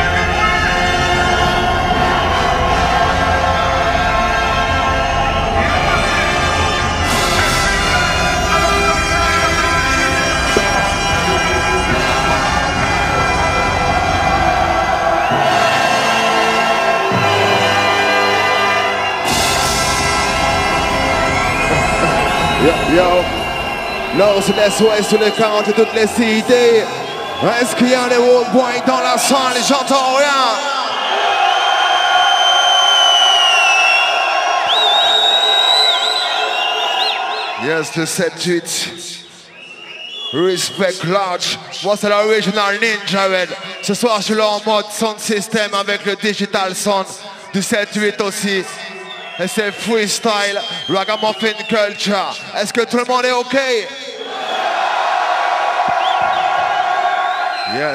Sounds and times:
Music: 0.0 - 37.6.

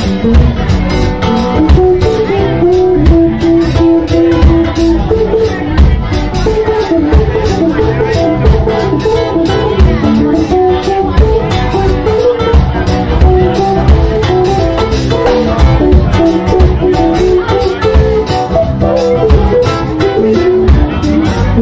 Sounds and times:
Guitar: 0.0 - 21.6
Speech: 0.0 - 21.6.

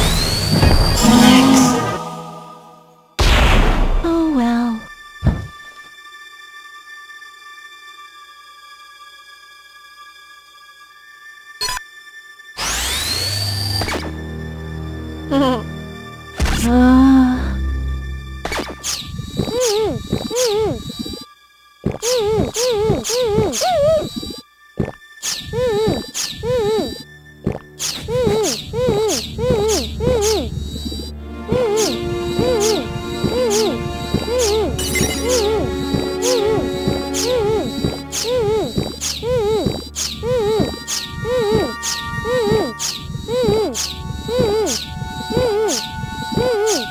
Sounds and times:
Music: 0.0 - 46.9.

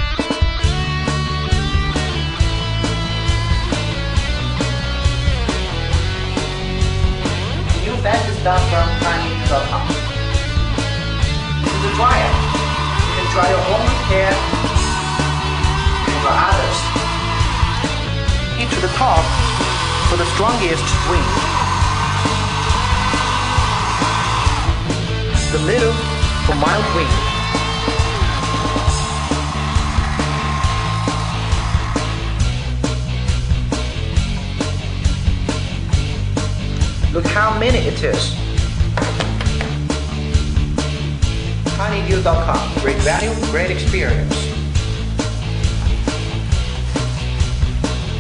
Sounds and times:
Hair dryer: 11.6 - 32.4.

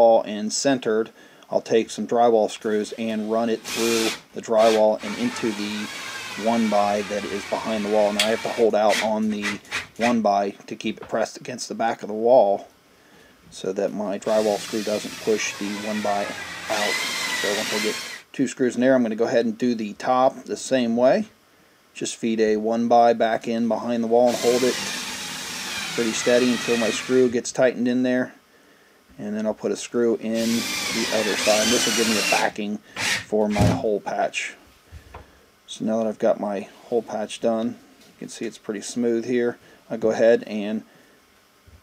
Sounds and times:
Speech: 0.0 - 12.7, 13.5 - 21.4, 22.0 - 24.8, 25.9 - 28.4, 29.2 - 34.6, 35.7 - 40.9
Inside, small room: 0.0 - 41.8.

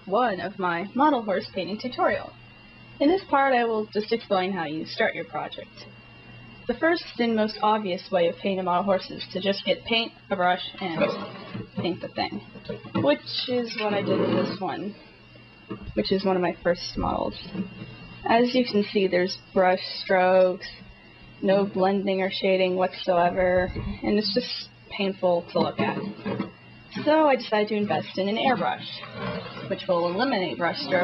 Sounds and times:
Speech: 3.0 - 5.8, 6.7 - 12.4, 13.0 - 14.9, 16.0 - 17.4, 18.3 - 20.8, 21.4 - 26.1, 27.0 - 29.0, 29.7 - 31.0.

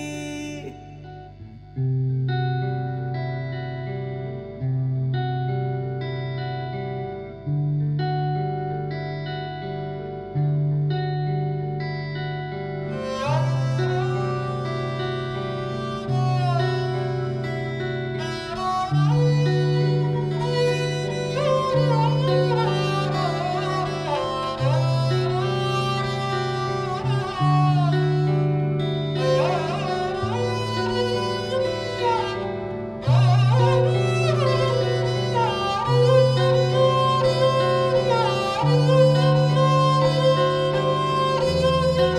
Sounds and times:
Guitar: 0.0 - 42.1.

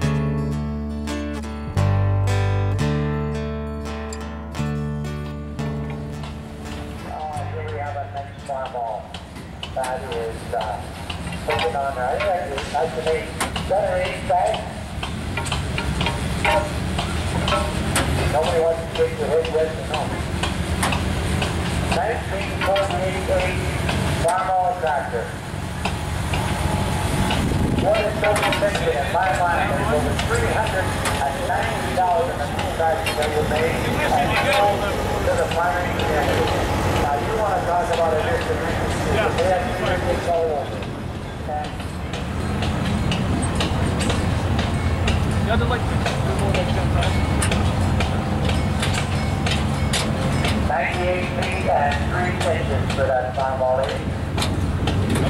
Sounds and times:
Speech: 7.0 - 9.1, 9.7 - 14.8, 17.4 - 20.2, 21.9 - 25.4, 27.8 - 41.9, 45.4 - 47.3, 50.6 - 54.1.

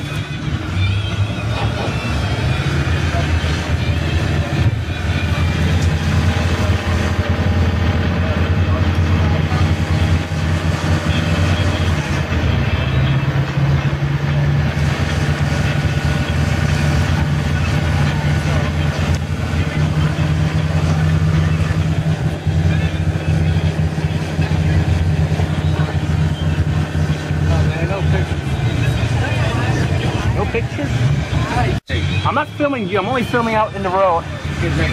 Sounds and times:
Bus: 0.0 - 34.9
Outside, urban or manmade: 0.0 - 34.9
Speech: 8.1 - 13.9, 17.0 - 34.9.

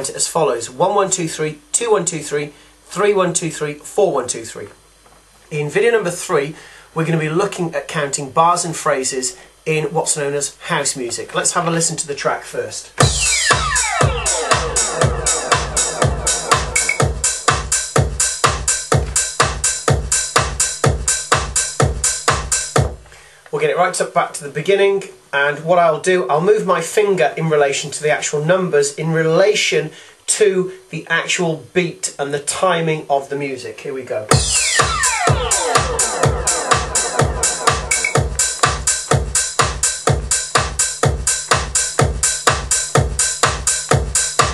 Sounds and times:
Speech: 0.0 - 4.8, 5.5 - 13.0, 23.5 - 34.3
House music: 13.0 - 23.0, 34.3 - 44.5.

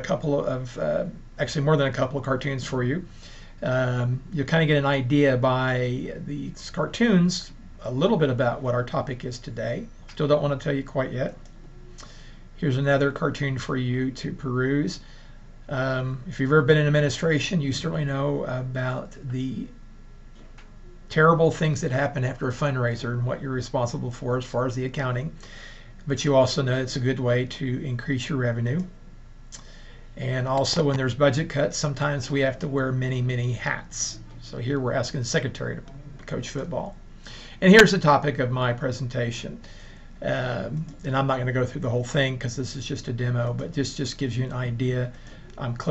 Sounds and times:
Narration, monologue: 0.0 - 45.9.

